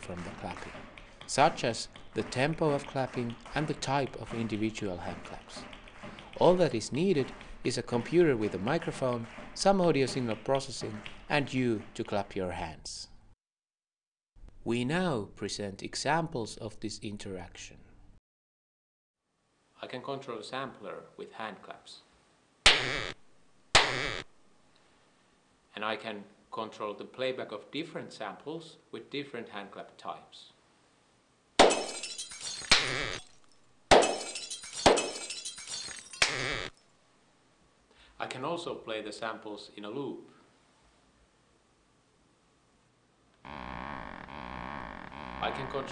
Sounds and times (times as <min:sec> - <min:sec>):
Speech: 0:00.0 - 0:05.6, 0:06.4 - 0:13.1, 0:14.6 - 0:18.0, 0:19.8 - 0:22.1, 0:25.7 - 0:30.6, 0:38.2 - 0:40.4, 0:45.4 - 0:45.9.